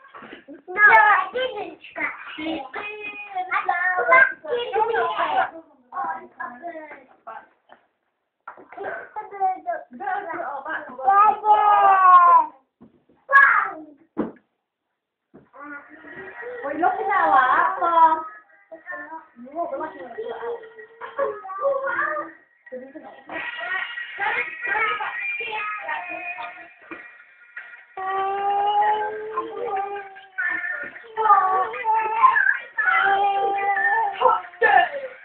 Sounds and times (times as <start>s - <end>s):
Child speech, kid speaking: 0.7s - 7.2s, 8.8s - 12.7s, 13.3s - 14.1s, 15.6s - 22.4s, 23.4s - 26.7s, 28.0s - 35.2s.